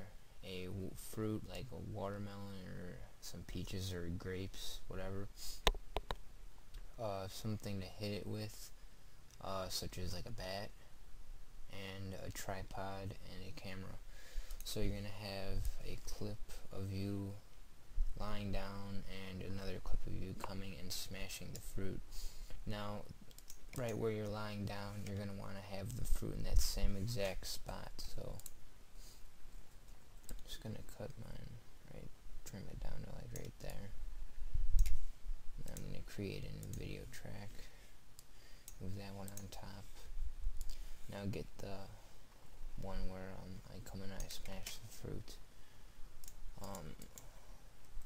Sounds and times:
Speech: 0.0 - 5.6, 7.0 - 8.8, 9.4 - 10.8, 11.7 - 14.0, 14.6 - 17.4, 18.2 - 22.0, 22.6 - 23.2, 23.8 - 28.5, 30.4 - 34.0, 35.6 - 37.7, 38.8 - 40.1, 41.1 - 42.0, 42.8 - 45.4, 46.6 - 47.1.

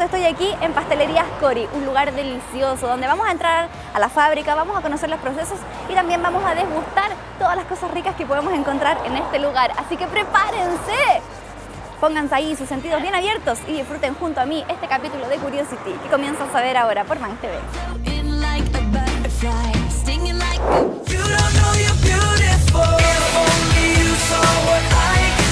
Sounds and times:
Speech: 0.0 - 11.3, 12.0 - 17.7
Music: 0.0 - 15.9, 17.0 - 25.5.

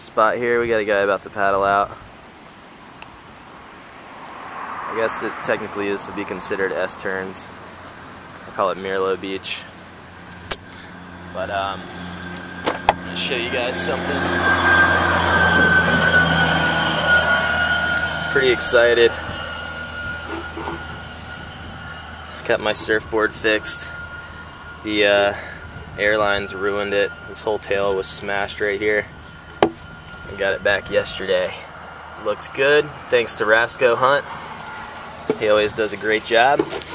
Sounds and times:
Speech: 0.0 - 2.0, 4.9 - 7.5, 8.5 - 9.8, 11.4 - 11.8, 13.1 - 14.3, 18.3 - 19.2, 22.4 - 24.0, 24.8 - 29.1, 30.3 - 34.3, 35.3 - 36.8
Vehicle: 0.0 - 36.9.

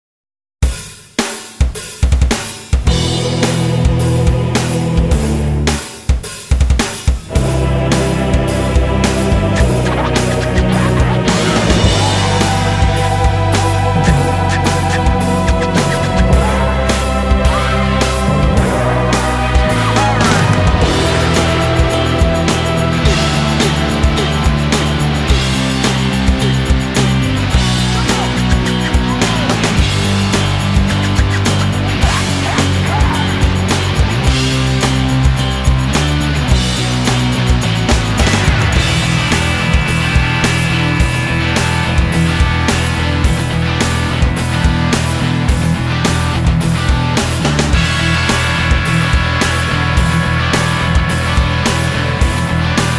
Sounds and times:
Bass drum: 1.6 - 5.8, 6.6 - 52.9.

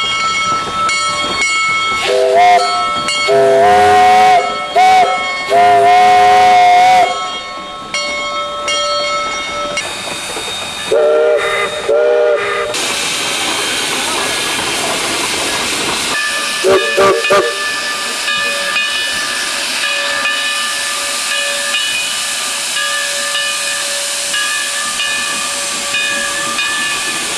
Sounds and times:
Steam whistle: 2.0 - 2.7, 3.3 - 7.3, 10.9 - 12.8, 16.6 - 17.6
Hiss: 9.8 - 27.3.

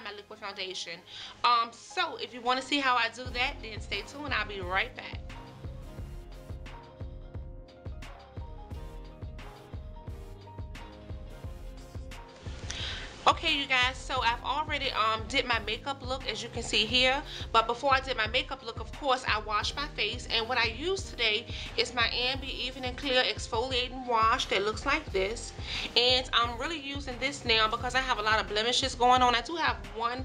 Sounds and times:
Speech: 0.0 - 5.2, 13.3 - 30.2
Music: 0.0 - 30.2.

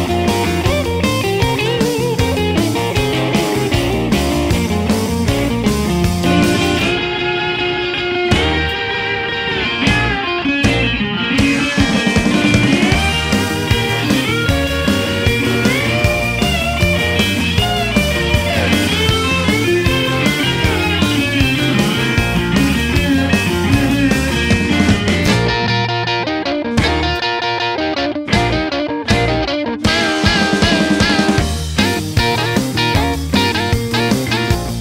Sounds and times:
Bass guitar: 0.0 - 34.8
Electric guitar: 0.0 - 34.8
Rock music: 0.0 - 34.8.

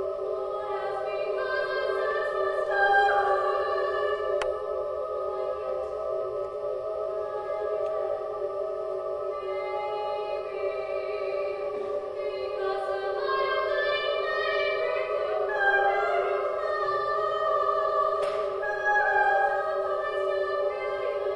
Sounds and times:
Choir: 0.0 - 21.3.

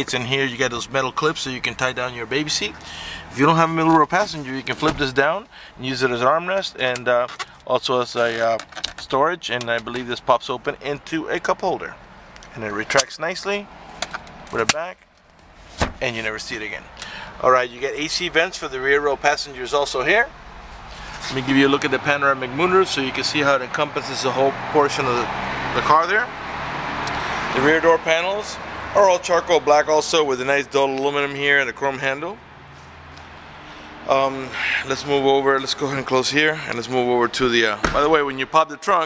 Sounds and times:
Speech: 0.0 - 2.8, 3.4 - 13.7, 14.5 - 15.0, 16.0 - 20.3, 21.2 - 26.3, 27.6 - 32.4, 34.1 - 39.0
Vehicle: 0.0 - 39.0.

